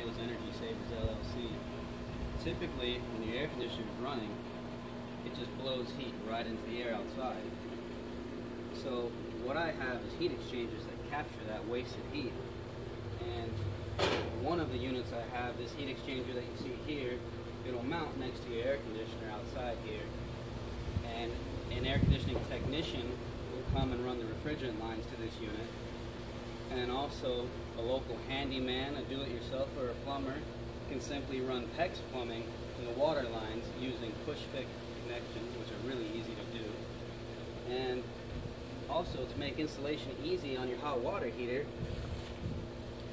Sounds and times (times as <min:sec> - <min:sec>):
Speech: 0:00.0 - 0:01.6, 0:02.4 - 0:04.4, 0:05.2 - 0:07.6, 0:08.7 - 0:12.4, 0:13.2 - 0:13.6, 0:14.3 - 0:20.2, 0:21.0 - 0:25.8, 0:26.7 - 0:36.9, 0:37.6 - 0:38.1, 0:38.8 - 0:41.7.